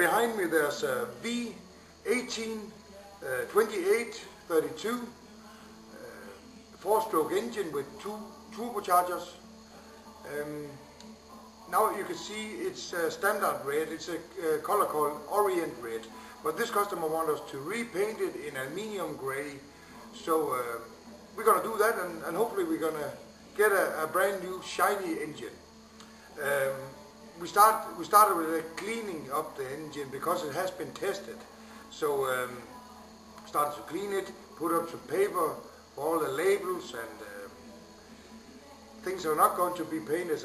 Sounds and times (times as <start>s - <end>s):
Speech: 0.0s - 5.2s, 5.9s - 9.4s, 10.2s - 10.8s, 11.7s - 25.6s, 26.4s - 32.8s, 33.4s - 37.6s, 39.0s - 40.4s
Music: 0.0s - 40.4s.